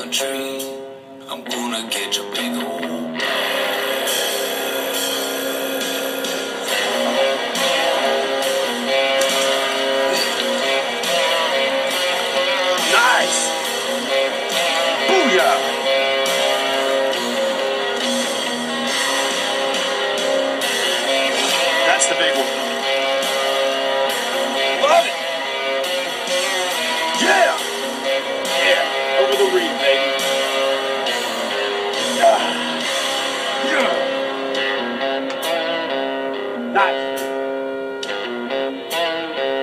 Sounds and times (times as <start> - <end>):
Music: 0.0 - 39.6.